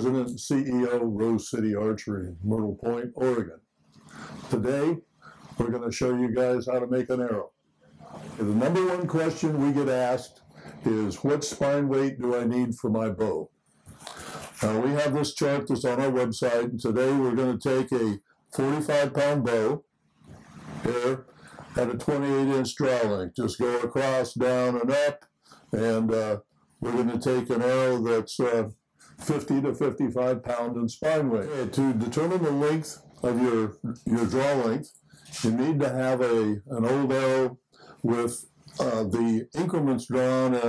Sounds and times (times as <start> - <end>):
Speech: 0.0 - 3.6, 4.3 - 5.0, 5.6 - 7.5, 8.1 - 19.8, 20.8 - 40.6.